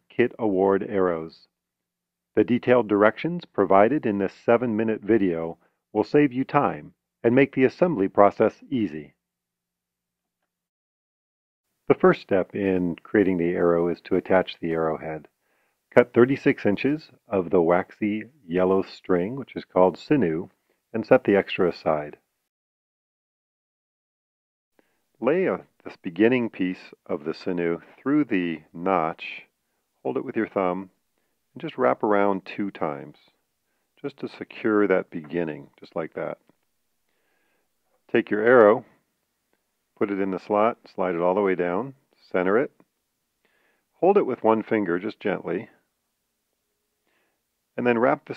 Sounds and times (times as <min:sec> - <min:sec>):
Speech: 0:00.0 - 0:01.5, 0:02.4 - 0:09.2, 0:11.9 - 0:15.3, 0:16.0 - 0:22.2, 0:25.2 - 0:31.0, 0:31.6 - 0:33.4, 0:34.0 - 0:36.4, 0:38.1 - 0:39.0, 0:40.0 - 0:42.8, 0:44.0 - 0:45.8, 0:47.8 - 0:48.3.